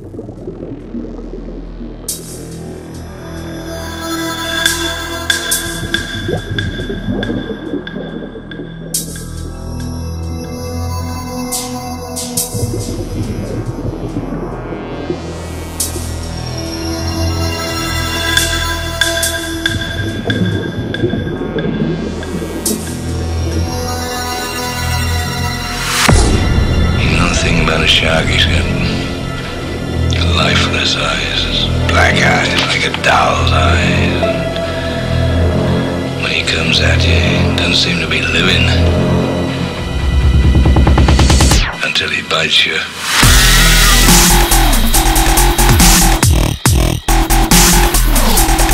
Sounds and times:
Electronic music: 0.0s - 42.0s, 43.0s - 48.7s
Speech: 27.0s - 29.1s, 30.1s - 34.3s, 36.2s - 38.9s, 41.8s - 43.0s.

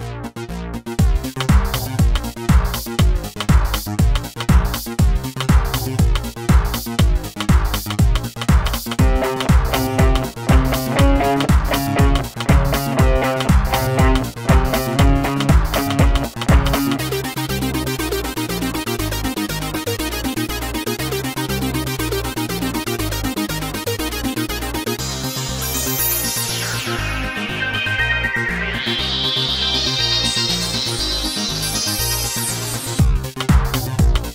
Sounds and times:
Techno: 1.0s - 21.3s, 25.0s - 34.3s
Exciting music: 8.8s - 18.8s, 26.0s - 32.4s.

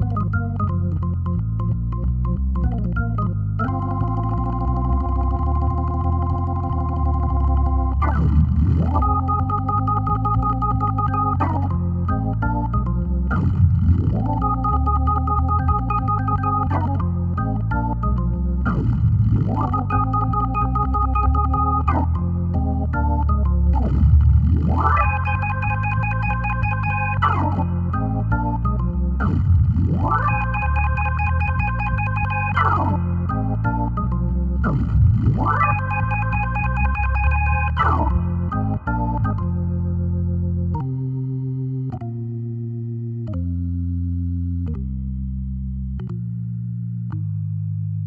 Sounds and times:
Electric piano: 0.0s - 47.3s
Organ: 0.0s - 48.0s.

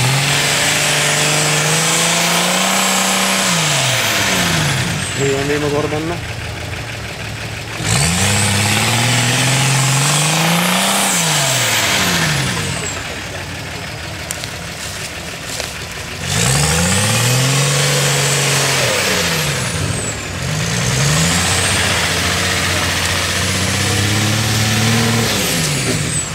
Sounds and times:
Accelerating, revving, vroom: 0.0s - 6.1s, 7.8s - 13.1s, 16.2s - 26.3s
Vehicle: 0.0s - 26.3s
Speech: 5.2s - 6.3s.

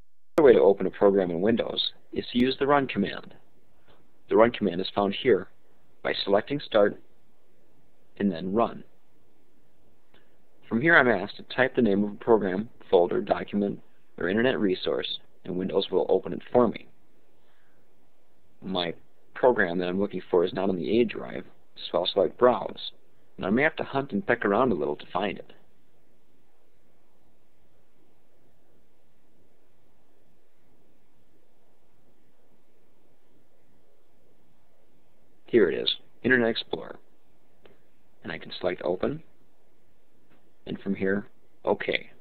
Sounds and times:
Speech: 0.4s - 3.4s, 4.3s - 7.0s, 8.2s - 8.9s, 10.6s - 16.9s, 18.6s - 25.6s, 35.5s - 37.0s, 38.2s - 39.3s, 40.6s - 42.2s.

